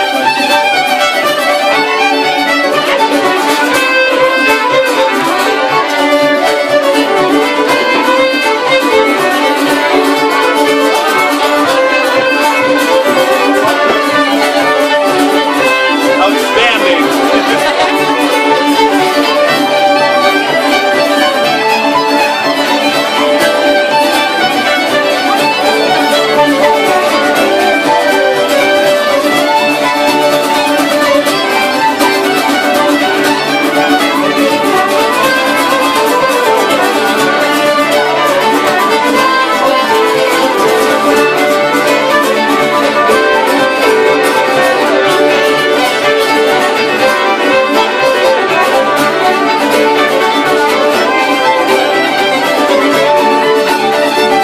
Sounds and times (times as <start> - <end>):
Music: 0.0 - 54.4
Speech: 16.2 - 18.3.